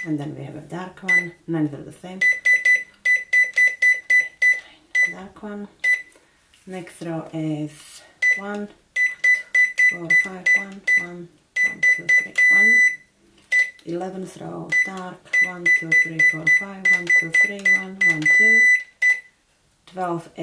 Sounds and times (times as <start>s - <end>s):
Speech: 0.0s - 2.3s, 5.1s - 5.8s, 6.7s - 8.8s, 9.9s - 12.9s, 13.8s - 18.7s, 19.9s - 20.4s.